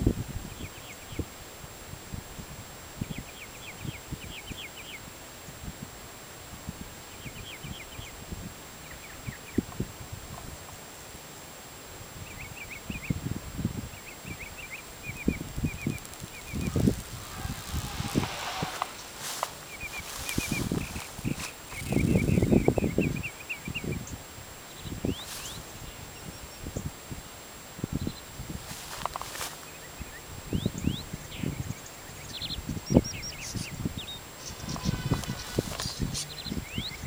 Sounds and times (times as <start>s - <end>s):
Outside, rural or natural: 0.0s - 37.0s.